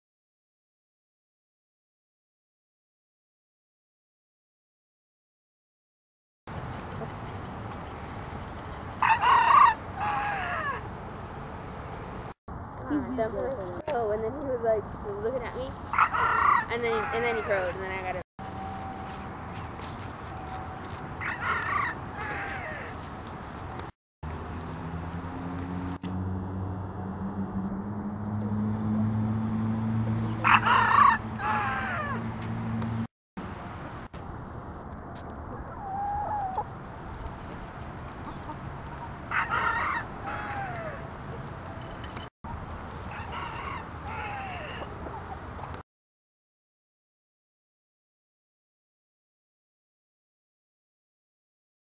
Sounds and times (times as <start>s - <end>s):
Crowing, cock-a-doodle-doo: 9.0s - 10.8s, 16.0s - 17.6s, 30.4s - 32.2s, 39.3s - 41.0s
Cluck: 35.5s - 36.7s, 38.2s - 40.0s.